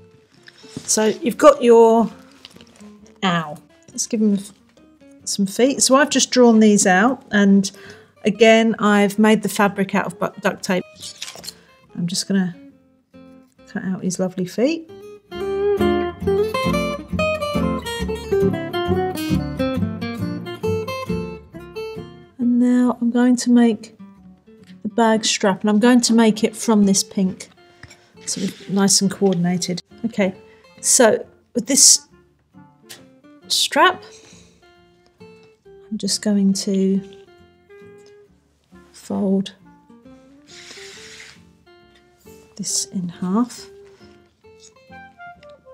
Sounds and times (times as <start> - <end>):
Acoustic guitar: 0.0 - 5.6, 14.9 - 45.7
Speech: 0.9 - 2.2, 3.2 - 4.5, 5.3 - 10.8, 12.0 - 12.6, 13.7 - 14.9, 22.4 - 24.0, 24.9 - 27.5, 28.3 - 32.1, 33.5 - 34.1, 35.9 - 37.1, 39.0 - 39.6, 42.6 - 43.7.